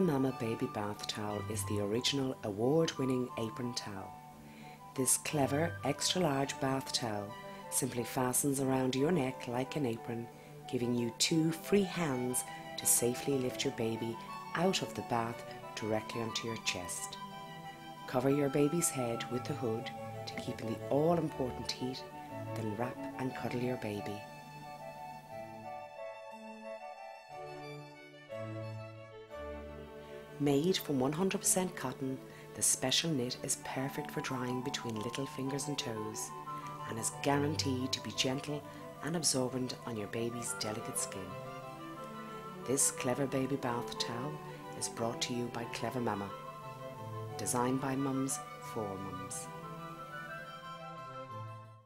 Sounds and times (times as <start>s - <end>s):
Speech: 0.0s - 4.1s, 5.0s - 17.2s, 18.1s - 22.0s, 22.6s - 24.2s, 30.4s - 41.4s, 42.7s - 46.3s, 47.4s - 49.5s
Music: 0.0s - 51.8s.